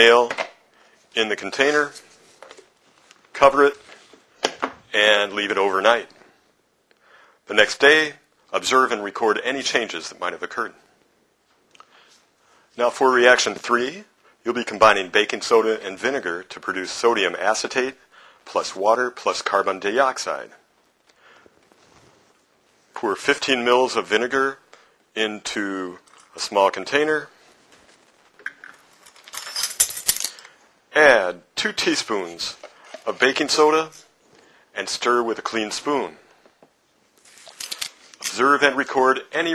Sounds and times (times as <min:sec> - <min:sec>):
Speech: 0:00.0 - 0:00.4, 0:01.2 - 0:02.0, 0:03.3 - 0:03.9, 0:04.9 - 0:06.2, 0:07.5 - 0:10.8, 0:12.8 - 0:20.6, 0:23.0 - 0:24.6, 0:25.2 - 0:27.4, 0:30.9 - 0:34.1, 0:34.8 - 0:36.2, 0:38.3 - 0:39.5
Inside, small room: 0:00.0 - 0:39.5.